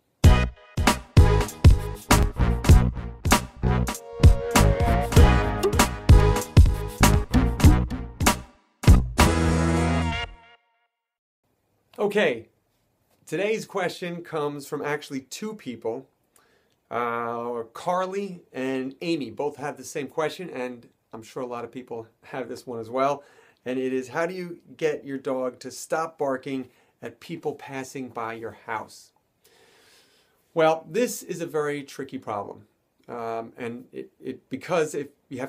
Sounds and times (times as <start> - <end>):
Speech: 12.0 - 12.5, 13.3 - 16.1, 16.9 - 29.2, 30.6 - 35.4.